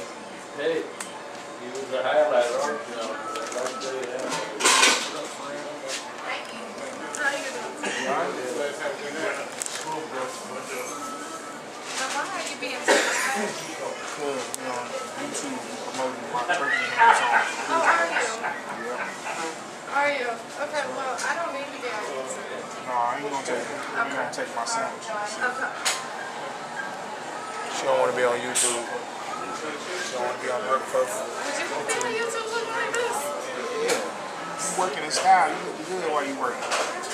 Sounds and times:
Inside, public space: 0.0 - 37.1.

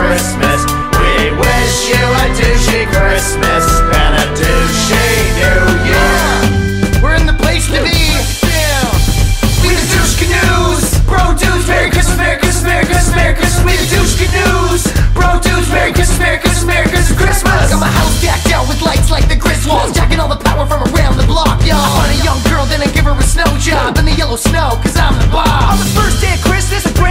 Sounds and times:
Music: 0.0 - 27.1
Speech: 7.0 - 9.0.

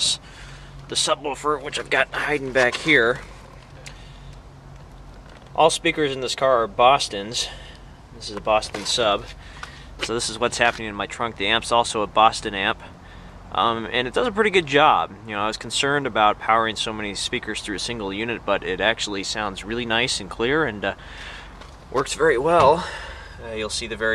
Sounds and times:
Speech: 0.0 - 0.2, 0.9 - 3.2, 5.6 - 9.4, 10.0 - 12.9, 13.5 - 21.0, 21.9 - 24.1.

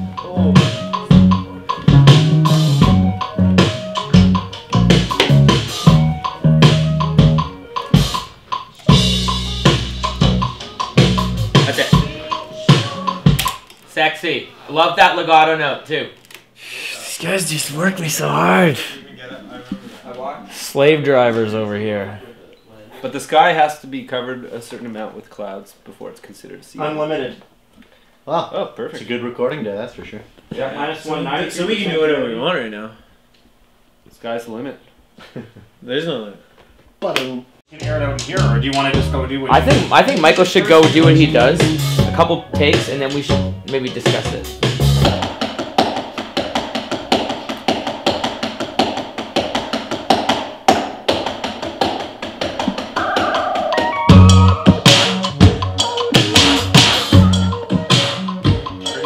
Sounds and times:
Music: 0.0 - 13.7, 37.7 - 59.0
Speech: 16.7 - 27.5, 28.3 - 33.0, 37.0 - 44.5.

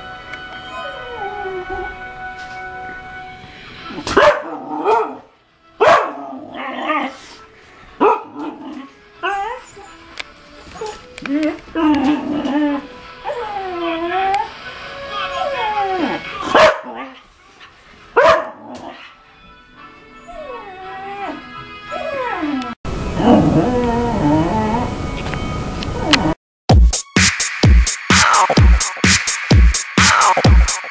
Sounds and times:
Music: 0.0 - 30.9
Whimper (dog): 0.6 - 2.0, 9.2 - 14.5, 15.1 - 17.2, 20.1 - 22.8.

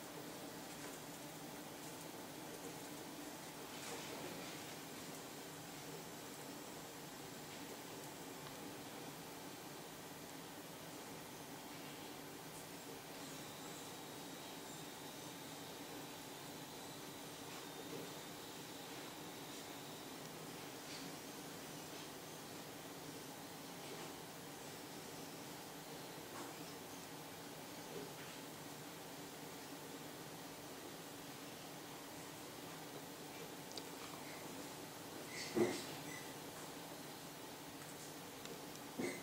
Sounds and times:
Inside, small room: 0.0 - 39.2.

